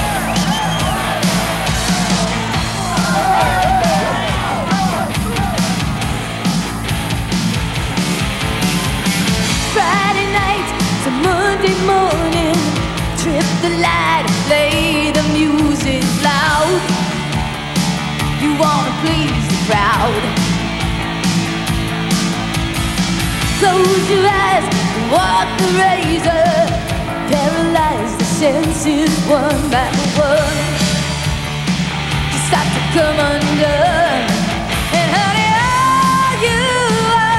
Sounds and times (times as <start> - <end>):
Music: 0.0 - 37.3.